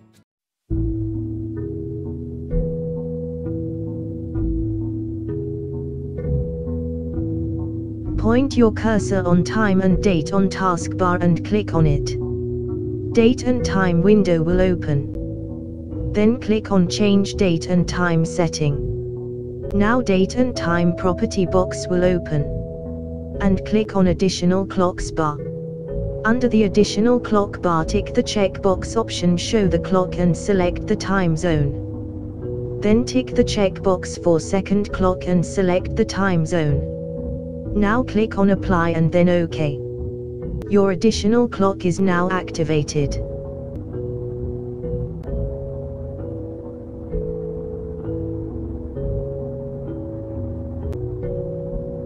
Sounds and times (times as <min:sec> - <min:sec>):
Music: 0:00.0 - 0:52.0
Speech: 0:08.2 - 0:12.2, 0:13.2 - 0:15.2, 0:16.2 - 0:18.9, 0:19.7 - 0:22.6, 0:23.4 - 0:25.4, 0:26.3 - 0:31.8, 0:32.8 - 0:36.9, 0:37.8 - 0:39.8, 0:40.7 - 0:43.2.